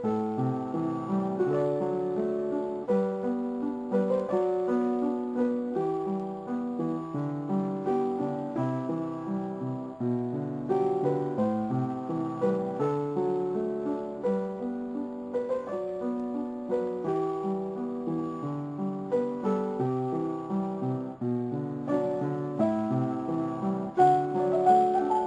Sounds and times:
Music: 0:00.0 - 0:25.2.

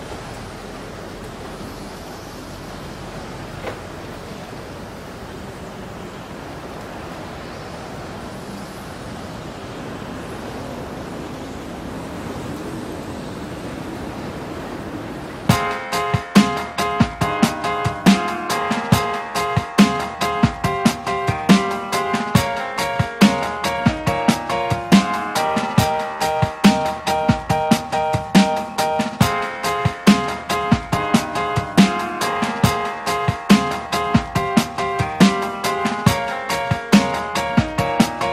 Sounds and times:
Music: 0:15.5 - 0:38.3.

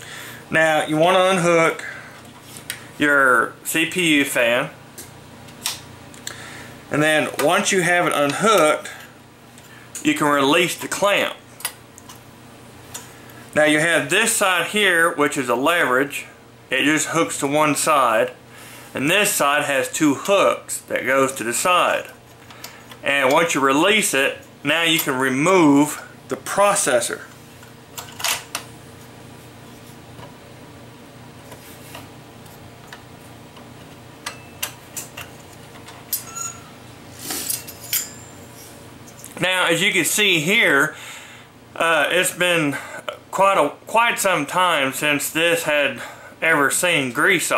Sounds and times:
Speech: 0:00.5 - 0:01.9, 0:03.0 - 0:04.8, 0:06.9 - 0:09.0, 0:10.0 - 0:11.4, 0:13.6 - 0:18.4, 0:19.0 - 0:22.2, 0:23.0 - 0:27.3, 0:39.4 - 0:41.0, 0:41.8 - 0:47.5.

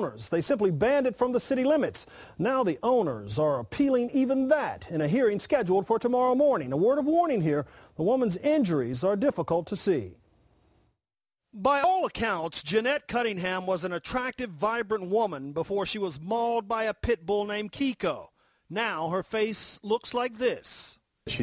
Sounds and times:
Speech: 0:00.0 - 0:10.2, 0:11.6 - 0:21.4.

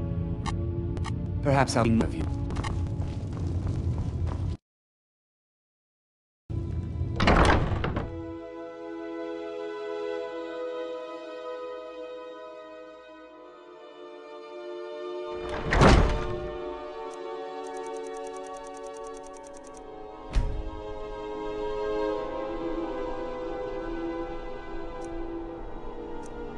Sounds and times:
Music: 0:00.0 - 0:04.6, 0:06.5 - 0:26.5.

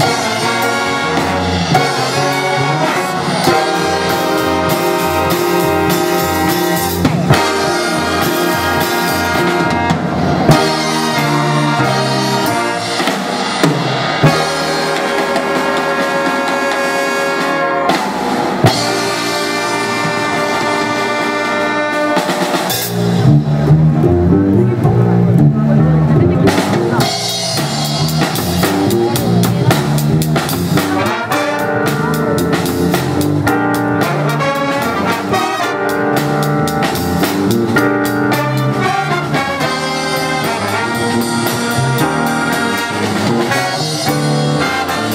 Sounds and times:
Jazz: 0:00.0 - 0:45.1
Orchestra: 0:00.0 - 0:45.1.

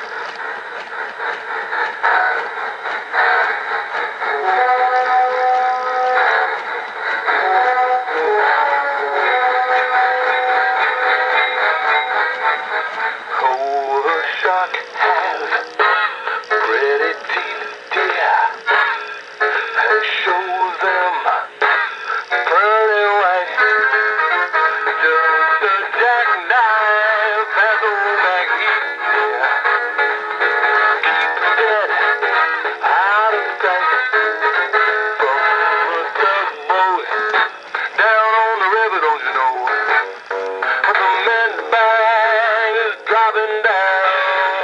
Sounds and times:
Music: 0:00.0 - 0:44.6
Male singing: 0:04.4 - 0:06.2, 0:07.4 - 0:10.4, 0:13.4 - 0:15.6, 0:16.6 - 0:18.6, 0:19.8 - 0:21.5, 0:22.5 - 0:23.6, 0:25.0 - 0:28.8, 0:31.6 - 0:32.0, 0:32.8 - 0:34.1, 0:35.2 - 0:37.2, 0:38.0 - 0:39.8, 0:40.9 - 0:44.6
Synthetic singing: 0:04.4 - 0:06.4, 0:07.4 - 0:10.3, 0:13.4 - 0:15.8, 0:16.6 - 0:18.7, 0:19.8 - 0:21.5, 0:22.4 - 0:23.7, 0:25.0 - 0:28.8, 0:32.8 - 0:37.2, 0:37.9 - 0:39.9, 0:40.9 - 0:44.6.

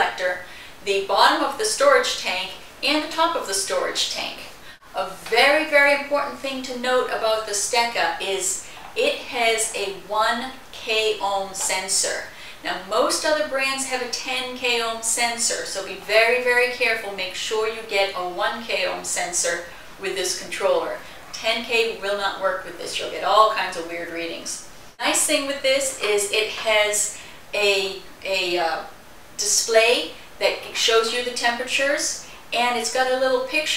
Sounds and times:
Speech: 0:00.0 - 0:33.7.

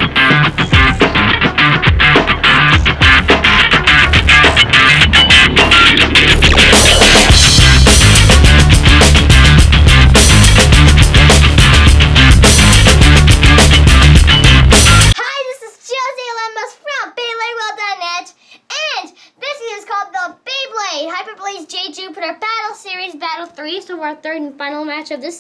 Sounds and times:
Child speech, kid speaking: 0:15.2 - 0:25.4.

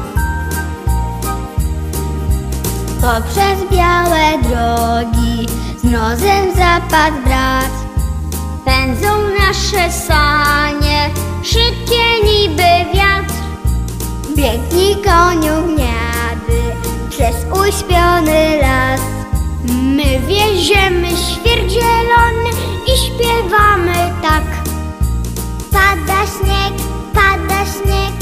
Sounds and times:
Music: 0:00.0 - 0:28.2.

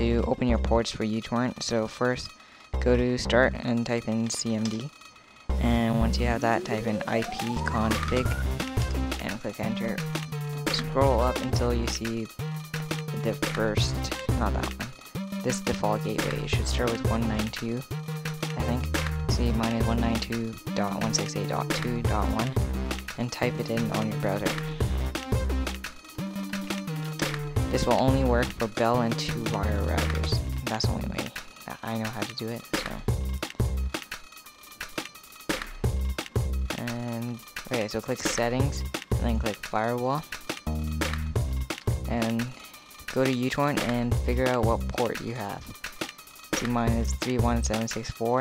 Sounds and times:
Speech: 0:00.0 - 0:04.9, 0:05.6 - 0:08.4, 0:09.2 - 0:10.0, 0:10.7 - 0:12.3, 0:13.1 - 0:17.8, 0:18.6 - 0:22.6, 0:23.2 - 0:24.6, 0:27.7 - 0:33.1, 0:36.7 - 0:40.3, 0:42.1 - 0:45.7, 0:46.6 - 0:48.4
Music: 0:00.0 - 0:48.4.

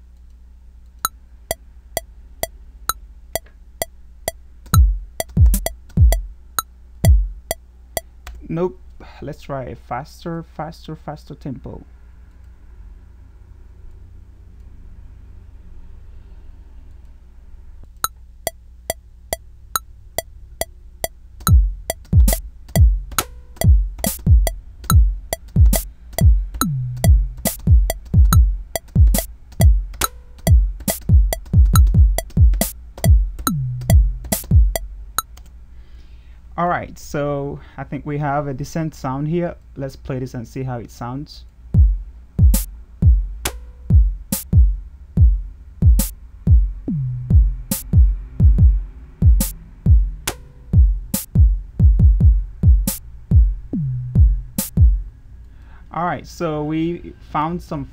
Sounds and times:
Music: 0:01.0 - 0:08.2, 0:18.0 - 0:35.4, 0:41.8 - 0:55.2
Speech: 0:08.4 - 0:11.9, 0:36.6 - 0:41.5, 0:55.9 - 0:57.9.

